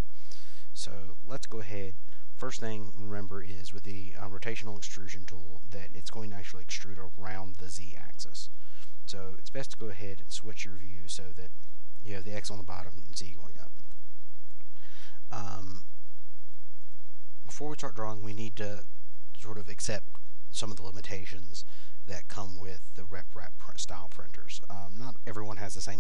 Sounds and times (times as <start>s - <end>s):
Speech: 0.8s - 8.5s, 9.1s - 13.8s, 15.3s - 15.9s, 17.5s - 26.0s.